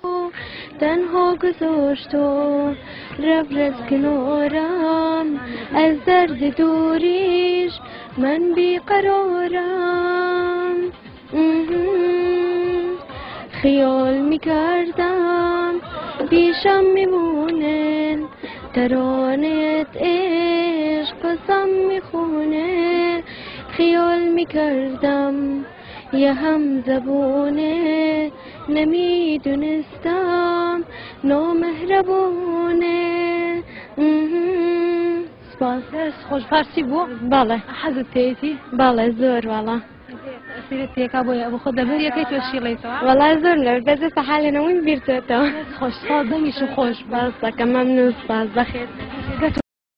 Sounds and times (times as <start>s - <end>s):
Female singing: 0.0s - 49.6s
Speech: 0.0s - 49.6s.